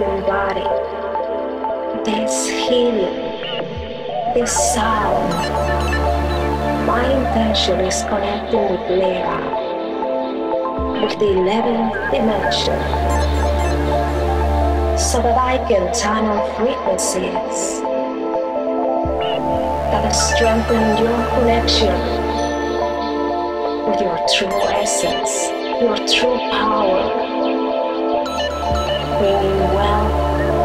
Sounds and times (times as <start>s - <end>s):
Speech: 0.0s - 0.9s, 2.0s - 5.5s, 6.9s - 9.6s, 10.8s - 13.0s, 15.0s - 17.8s, 19.9s - 22.2s, 23.9s - 27.2s, 29.0s - 30.6s
Music: 0.0s - 30.6s
Sound effect: 3.4s - 9.5s, 10.9s - 14.4s.